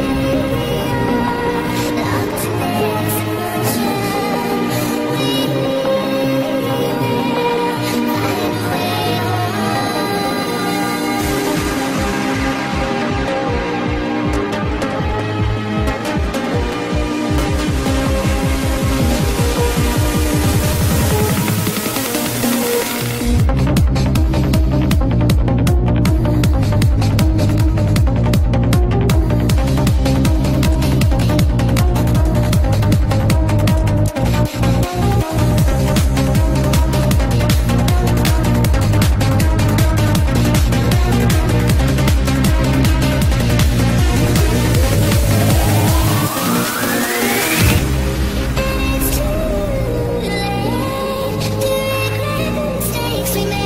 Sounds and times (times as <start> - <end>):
Music: 0.0 - 53.6.